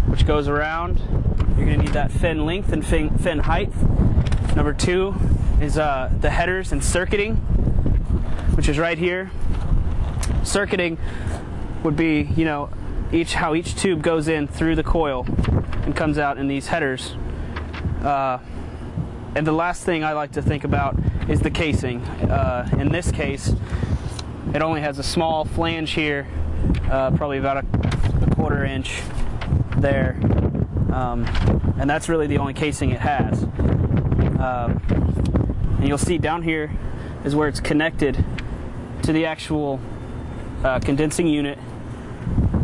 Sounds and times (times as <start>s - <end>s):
Speech: 0.1s - 3.8s, 4.5s - 7.4s, 8.5s - 9.4s, 10.4s - 11.0s, 11.8s - 17.2s, 18.0s - 18.5s, 19.4s - 23.6s, 24.5s - 27.7s, 28.3s - 29.1s, 29.8s - 30.2s, 30.9s - 33.5s, 34.4s - 34.8s, 35.8s - 38.3s, 39.0s - 39.9s, 40.6s - 41.6s.